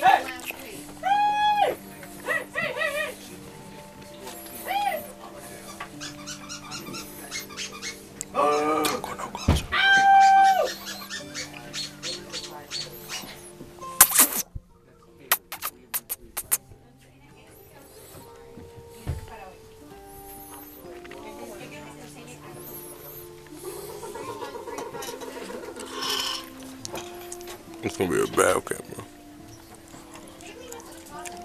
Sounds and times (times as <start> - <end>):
Music: 0.0 - 31.4.